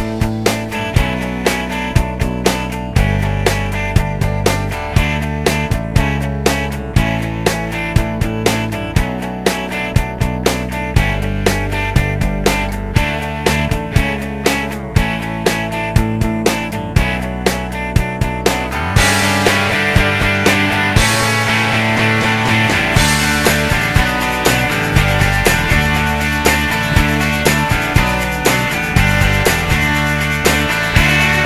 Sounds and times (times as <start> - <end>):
Music: 0.0 - 31.4.